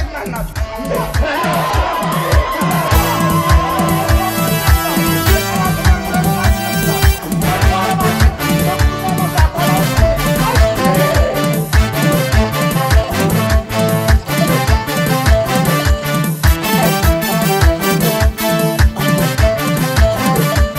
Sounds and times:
Music: 0:00.0 - 0:20.7.

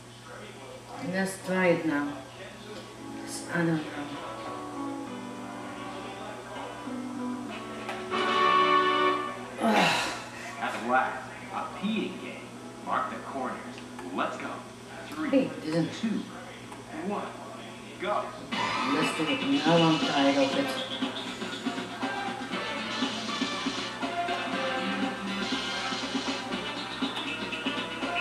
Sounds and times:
Inside, small room: 0:00.0 - 0:28.2
Music: 0:02.8 - 0:15.3, 0:18.4 - 0:28.2
Speech: 0:09.6 - 0:21.1.

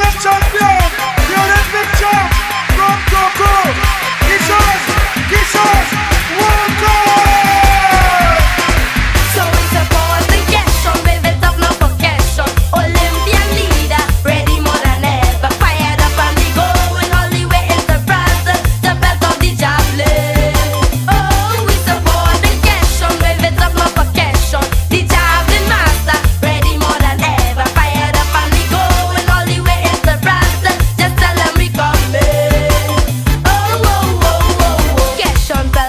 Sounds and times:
Music: 0:00.0 - 0:35.8.

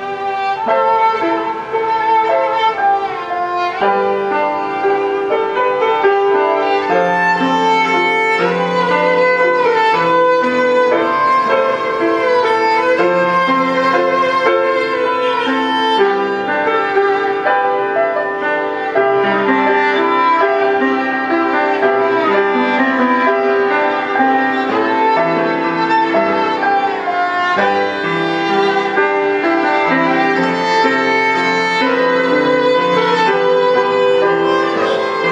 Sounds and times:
Violin, fiddle: 0:00.0 - 0:35.3.

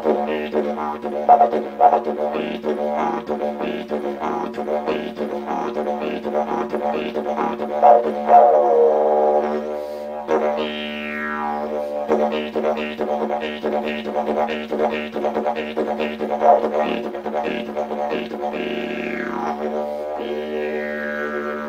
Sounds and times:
Didgeridoo: 0:00.0 - 0:21.6.

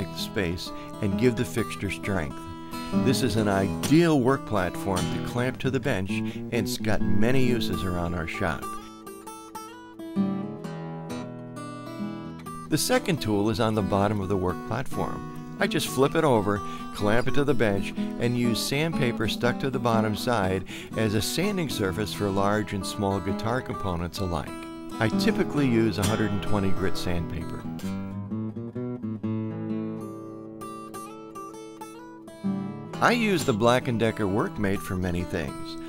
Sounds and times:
Speech: 0:00.0 - 0:08.8, 0:12.7 - 0:27.9, 0:33.0 - 0:35.8
Music: 0:00.0 - 0:35.8.

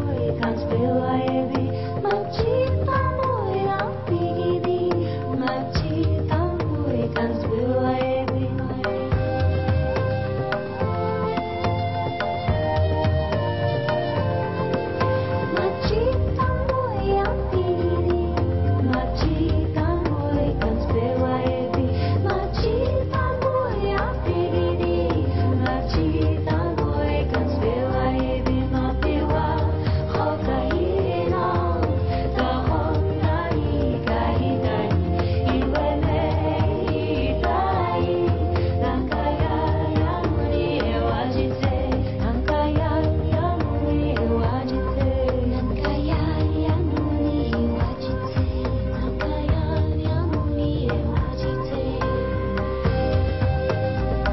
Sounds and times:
Music: 0:00.0 - 0:54.3.

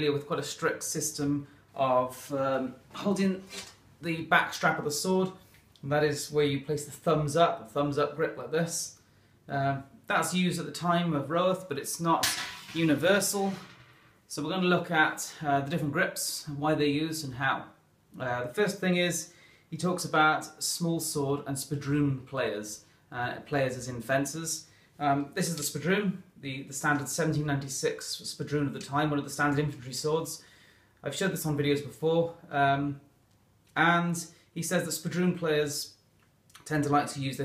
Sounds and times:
Speech: 0:00.0 - 0:13.7, 0:14.3 - 0:30.4, 0:31.0 - 0:33.1, 0:33.8 - 0:36.0, 0:36.6 - 0:37.4.

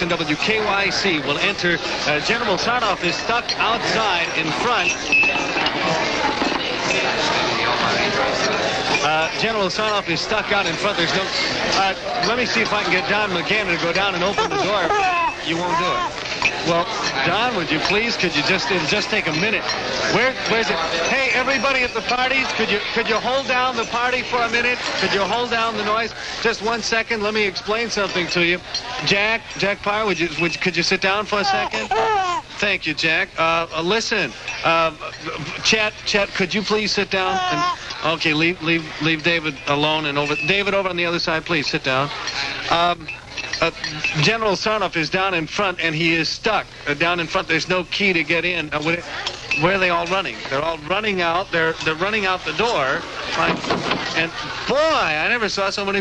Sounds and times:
Speech: 0:00.0 - 0:05.0, 0:05.8 - 0:56.0.

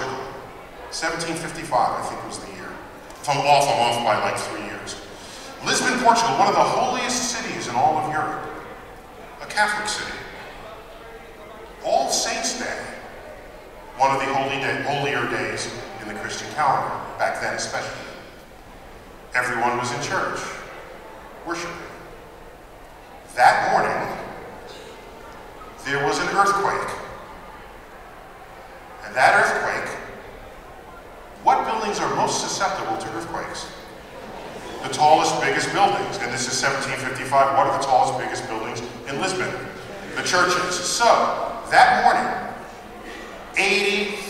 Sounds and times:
Male speech, man speaking: 0:00.0 - 0:08.6, 0:09.4 - 0:10.4, 0:11.8 - 0:13.0, 0:14.0 - 0:18.3, 0:19.4 - 0:20.7, 0:21.5 - 0:22.0, 0:23.3 - 0:24.4, 0:25.8 - 0:27.1, 0:29.0 - 0:30.2, 0:31.4 - 0:33.8, 0:34.8 - 0:42.6, 0:43.5 - 0:44.3.

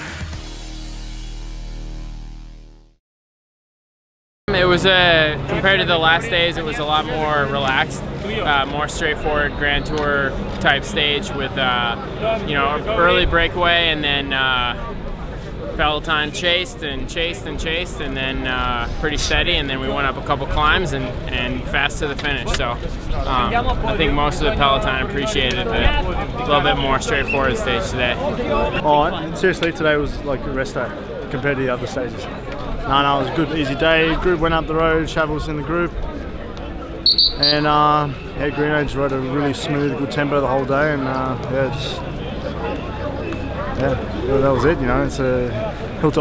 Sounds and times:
Speech: 0:04.5 - 0:14.9, 0:15.8 - 0:36.8, 0:37.4 - 0:46.2.

